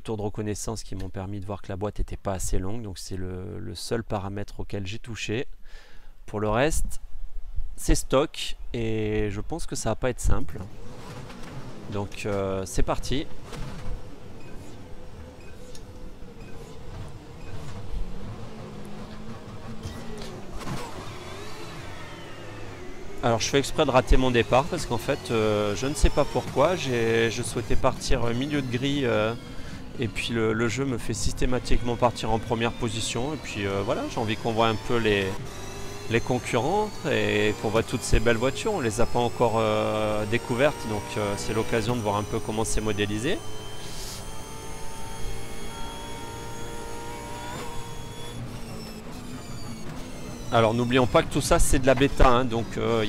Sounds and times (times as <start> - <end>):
Speech: 0.0 - 5.5, 6.3 - 7.0, 7.8 - 10.7, 11.9 - 13.3, 23.2 - 29.4, 30.0 - 35.4, 36.1 - 44.2, 50.5 - 53.0.